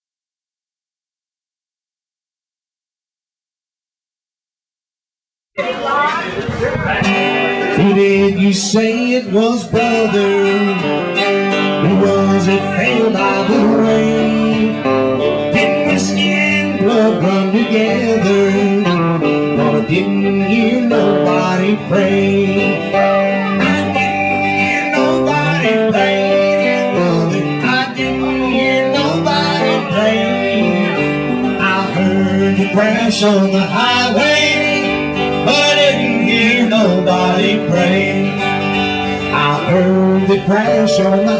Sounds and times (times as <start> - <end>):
Music: 6.0 - 41.4.